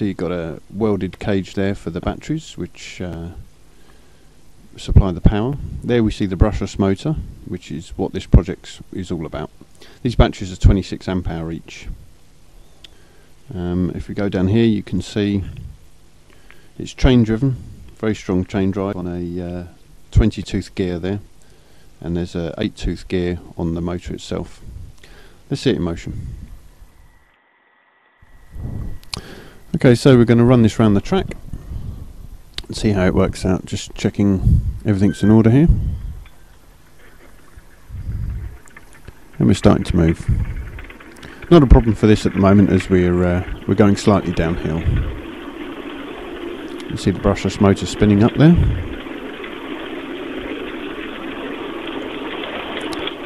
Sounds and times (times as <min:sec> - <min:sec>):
Narration, monologue: 0:00.0 - 0:27.2, 0:28.5 - 0:53.2.